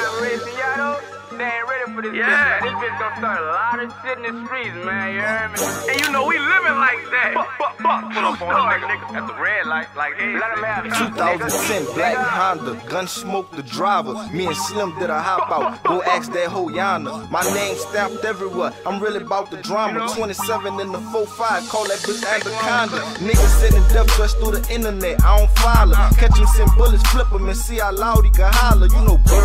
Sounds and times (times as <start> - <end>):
Music: 0.0 - 29.4.